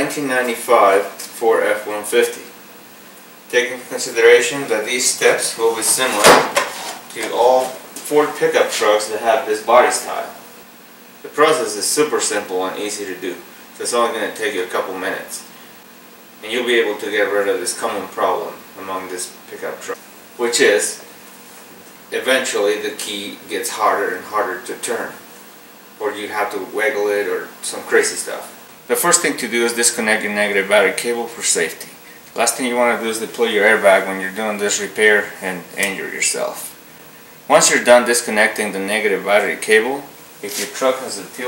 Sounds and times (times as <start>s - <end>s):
Speech: 0.0s - 2.6s, 3.5s - 6.5s, 7.1s - 10.4s, 11.2s - 15.5s, 16.4s - 21.1s, 22.1s - 25.2s, 26.0s - 36.8s, 37.5s - 41.4s.